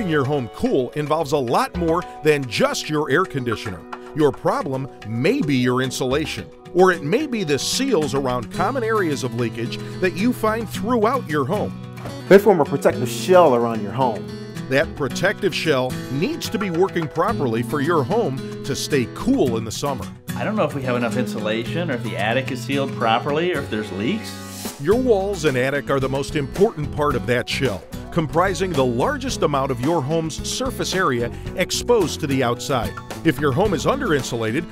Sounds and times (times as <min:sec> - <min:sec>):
Speech: 0:00.0 - 0:11.7, 0:12.3 - 0:34.7
Music: 0:00.0 - 0:34.7.